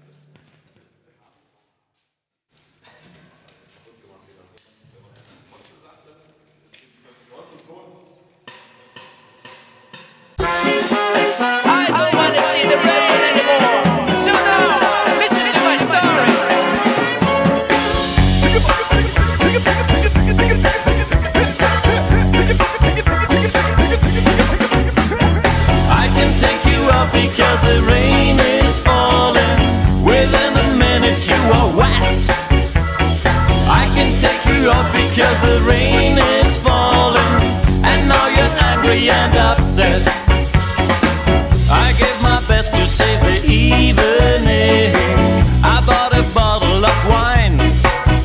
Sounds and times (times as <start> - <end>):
Music: 8.5 - 48.2.